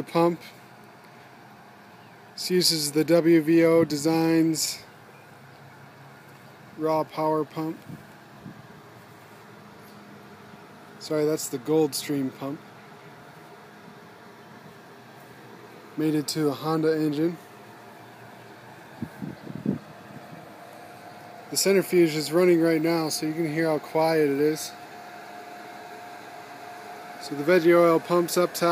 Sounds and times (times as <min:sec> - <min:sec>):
Speech: 0:00.0 - 0:00.6, 0:02.4 - 0:04.9, 0:06.8 - 0:07.8, 0:11.0 - 0:12.6, 0:16.0 - 0:17.4, 0:21.5 - 0:24.8, 0:27.2 - 0:28.7.